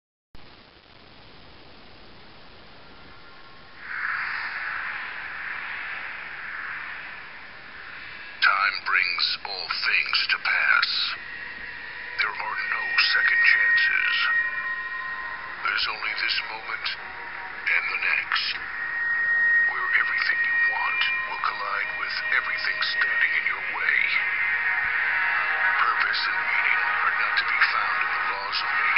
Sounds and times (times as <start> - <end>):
Inside, small room: 0.4 - 28.9
Speech: 8.4 - 11.2, 12.2 - 14.4, 15.6 - 17.0, 17.6 - 18.6, 19.7 - 24.2, 25.8 - 28.9.